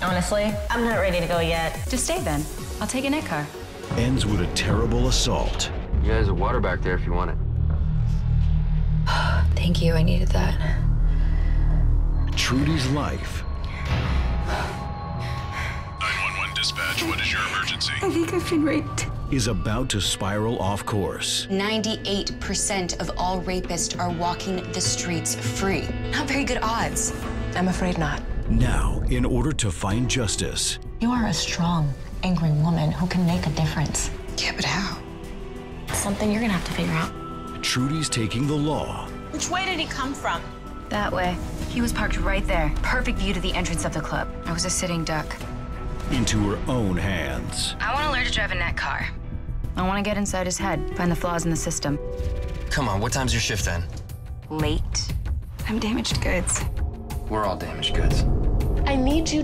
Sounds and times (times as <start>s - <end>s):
Music: 0.0s - 59.4s.